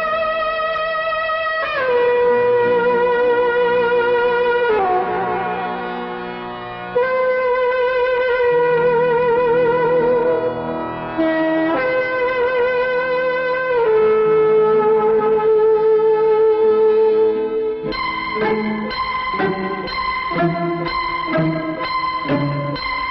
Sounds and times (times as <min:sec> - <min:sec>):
Music: 0:00.0 - 0:23.1.